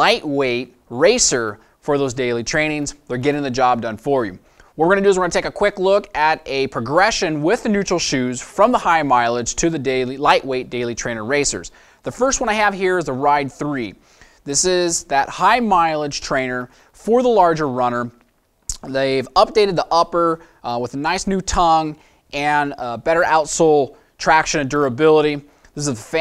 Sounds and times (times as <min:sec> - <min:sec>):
Speech: 0:00.0 - 0:26.2.